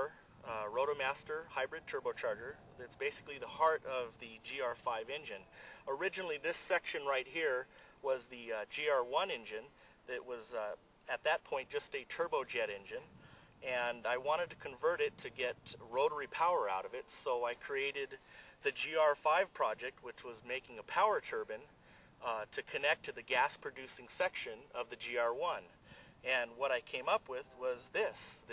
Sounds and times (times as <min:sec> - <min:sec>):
Speech: 0:00.0 - 0:28.5.